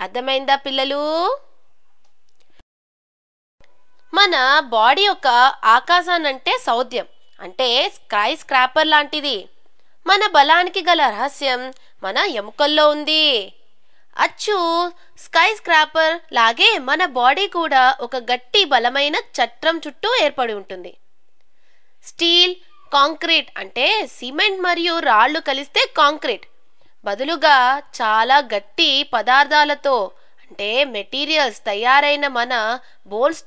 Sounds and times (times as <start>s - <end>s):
Speech: 0.0s - 1.5s, 4.1s - 9.5s, 10.1s - 13.6s, 14.2s - 21.0s, 22.1s - 26.5s, 27.1s - 33.4s.